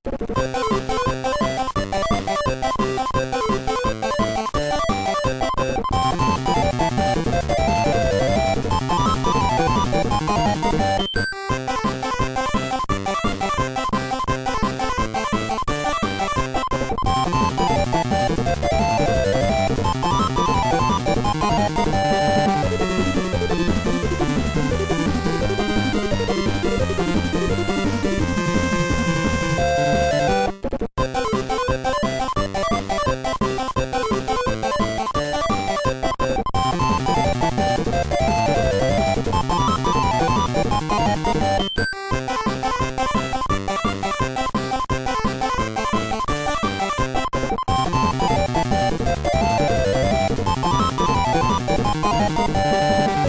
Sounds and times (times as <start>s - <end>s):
Music: 0.1s - 53.2s.